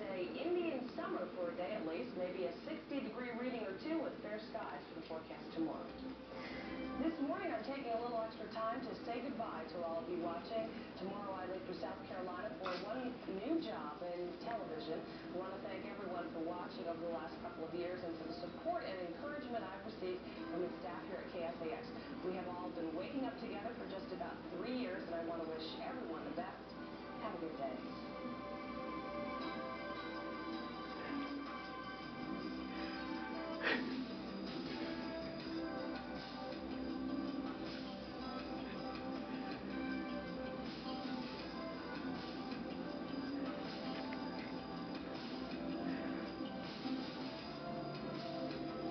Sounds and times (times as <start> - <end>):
Speech: 0.0 - 5.9, 7.0 - 26.6, 27.2 - 27.8
Music: 0.0 - 48.9.